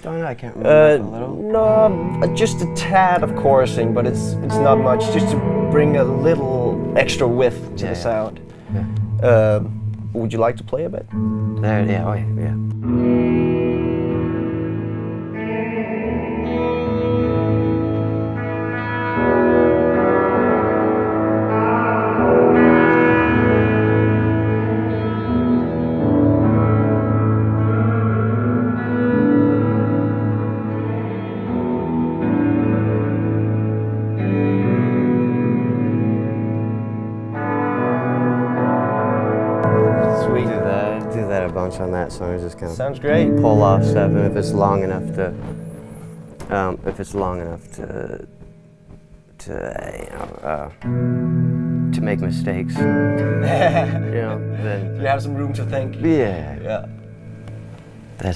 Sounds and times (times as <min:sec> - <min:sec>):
Guitar: 0:00.0 - 0:58.3.